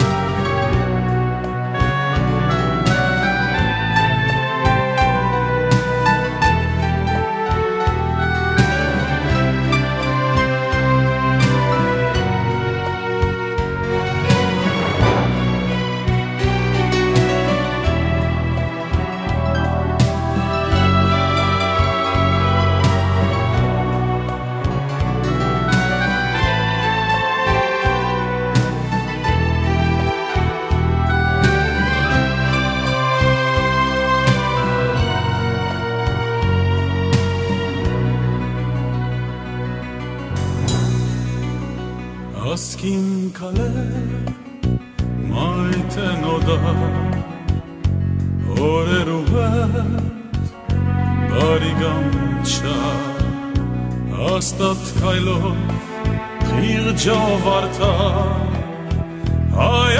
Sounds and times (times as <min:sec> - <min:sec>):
Background music: 0:00.0 - 0:59.9
Soundtrack music: 0:00.0 - 0:59.9.